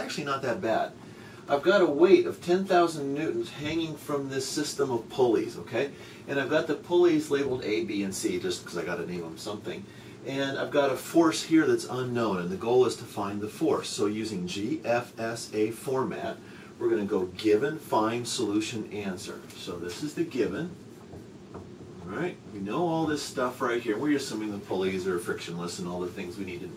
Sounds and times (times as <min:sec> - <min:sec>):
Speech: 0:00.0 - 0:20.8, 0:22.0 - 0:26.7.